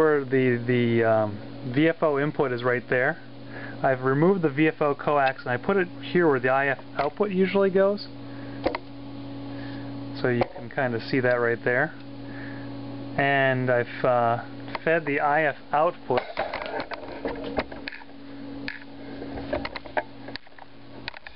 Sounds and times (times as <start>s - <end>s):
Speech: 0.0s - 3.2s, 3.8s - 8.1s, 10.2s - 12.0s, 13.2s - 16.3s.